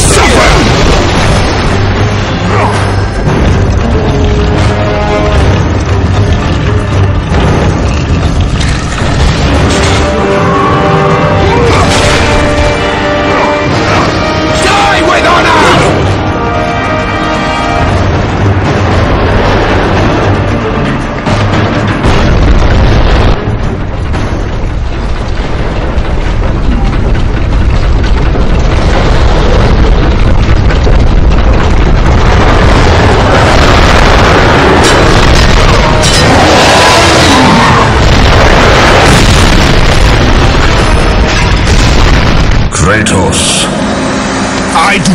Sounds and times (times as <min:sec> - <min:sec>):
Music: 0:00.0 - 0:45.1.